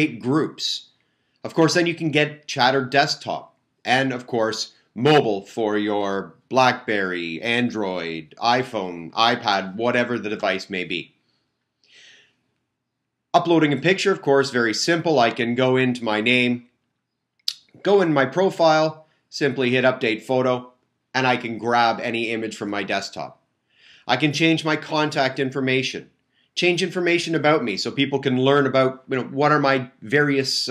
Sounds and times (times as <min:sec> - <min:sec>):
Speech: 0:00.0 - 0:00.9, 0:01.5 - 0:11.1, 0:13.4 - 0:16.6, 0:17.5 - 0:23.4, 0:24.1 - 0:30.7.